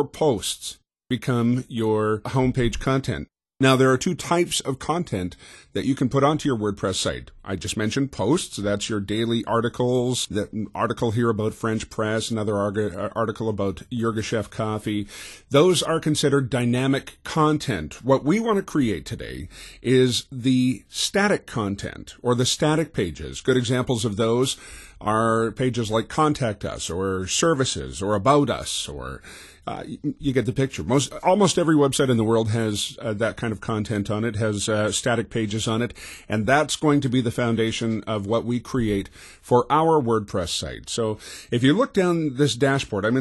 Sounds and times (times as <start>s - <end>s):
Speech: 0.0s - 43.2s.